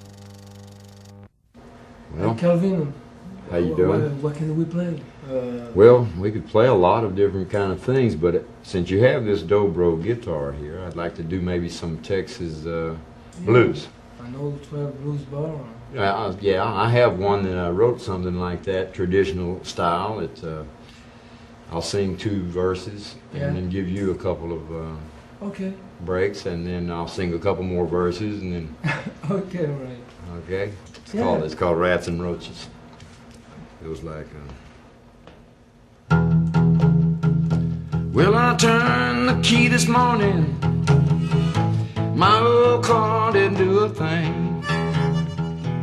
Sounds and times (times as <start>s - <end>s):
Speech: 2.1s - 20.7s, 21.7s - 32.8s.